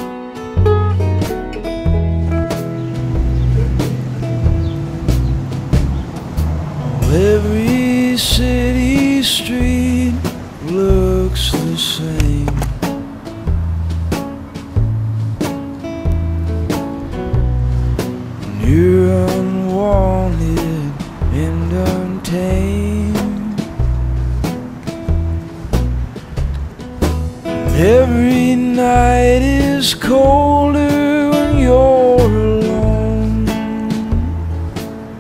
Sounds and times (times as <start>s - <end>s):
Music: 0.0s - 35.2s.